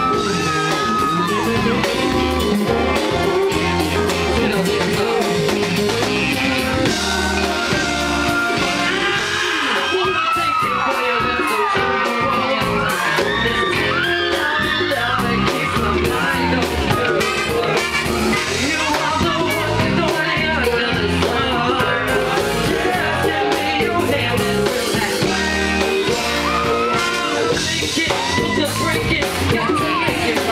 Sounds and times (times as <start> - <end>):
Rock and roll: 0.0 - 30.5
Singing: 0.0 - 30.5.